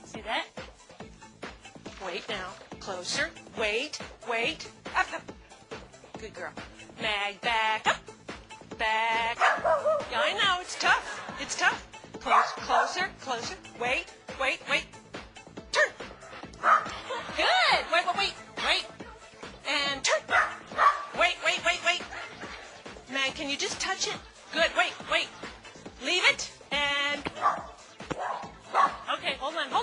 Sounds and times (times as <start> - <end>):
Speech: 0.0 - 0.5, 2.0 - 5.2, 6.2 - 8.0, 10.1 - 14.9, 17.4 - 18.9, 19.6 - 20.3, 21.2 - 22.1, 23.1 - 25.4, 26.0 - 27.3, 29.0 - 29.8
Music: 0.0 - 29.8
Bow-wow: 9.4 - 10.1, 12.3 - 12.9, 16.6 - 17.0, 20.1 - 21.1, 27.4 - 29.0.